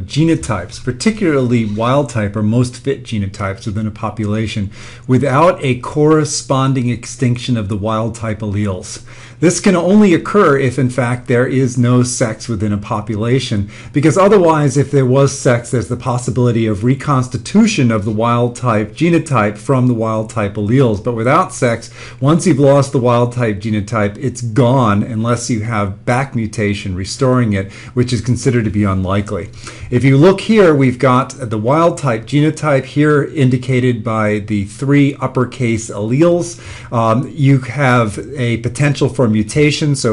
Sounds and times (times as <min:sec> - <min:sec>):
Speech: 0:00.0 - 0:40.1.